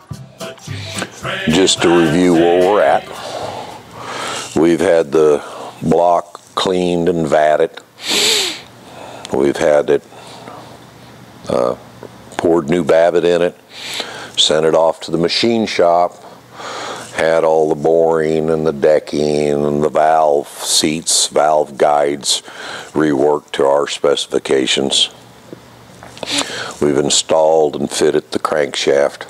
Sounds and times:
Speech: 0:01.5 - 0:03.2, 0:04.6 - 0:07.8, 0:09.3 - 0:10.1, 0:11.4 - 0:11.8, 0:12.4 - 0:13.6, 0:14.4 - 0:16.2, 0:17.1 - 0:25.2, 0:26.8 - 0:29.2.

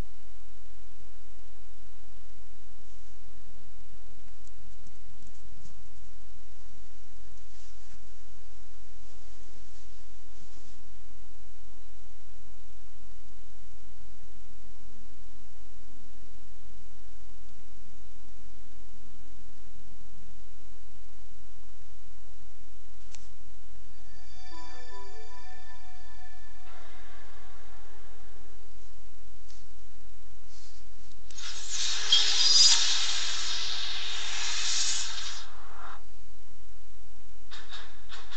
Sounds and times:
White noise: 0:00.0 - 0:38.3.

